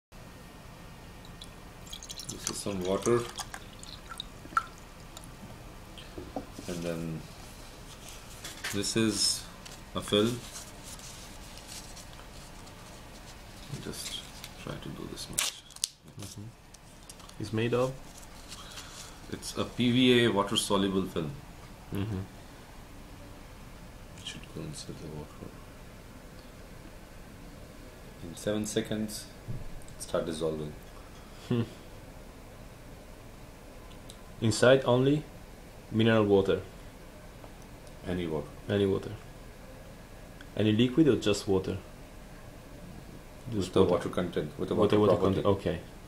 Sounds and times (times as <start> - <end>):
Water: 1.2 - 5.3
Speech: 2.3 - 3.4, 6.6 - 7.3, 8.7 - 10.5, 13.7 - 15.6, 17.4 - 18.0, 19.3 - 21.4, 24.2 - 25.6, 28.2 - 29.4, 30.0 - 30.8, 34.4 - 35.3, 35.9 - 36.7, 38.0 - 39.2, 40.6 - 41.9, 43.5 - 45.9.